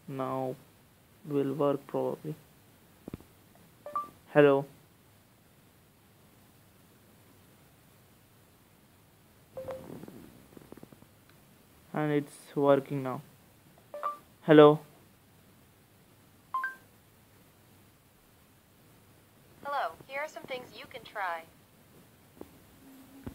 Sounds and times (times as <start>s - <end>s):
Inside, small room: 0.0s - 23.3s
Speech: 1.3s - 2.4s, 11.9s - 13.3s, 14.4s - 14.9s, 19.7s - 21.5s.